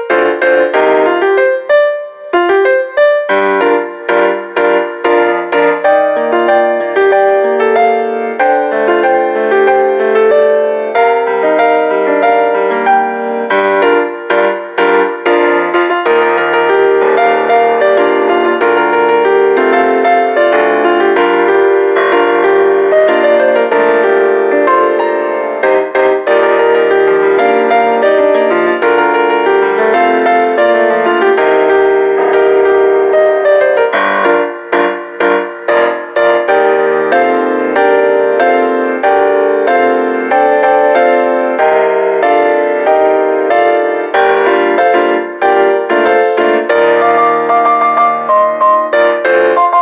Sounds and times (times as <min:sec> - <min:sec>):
Music: 0:00.0 - 0:49.8.